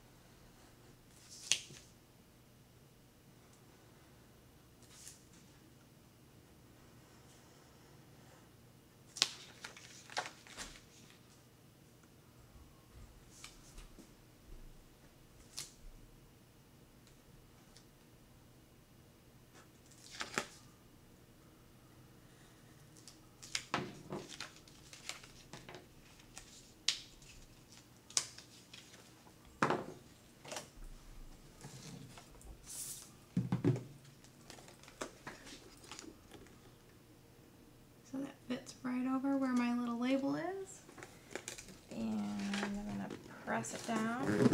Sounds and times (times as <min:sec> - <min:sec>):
Inside, small room: 0:00.0 - 0:44.5.